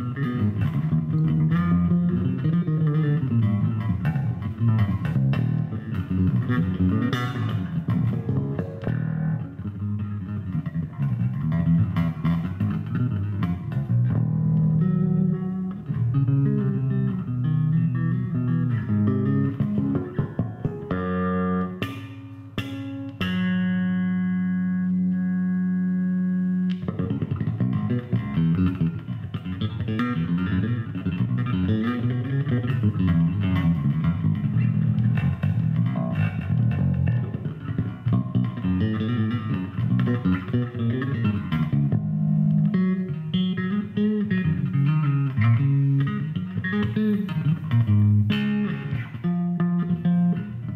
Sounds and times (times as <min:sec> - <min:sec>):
Strum: 0:00.0 - 0:50.7.